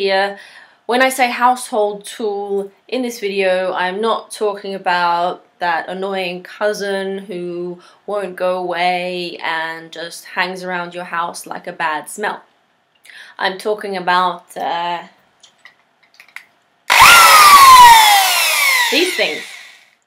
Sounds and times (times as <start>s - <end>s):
Speech: 0.0s - 12.5s, 13.4s - 15.2s, 18.9s - 19.5s.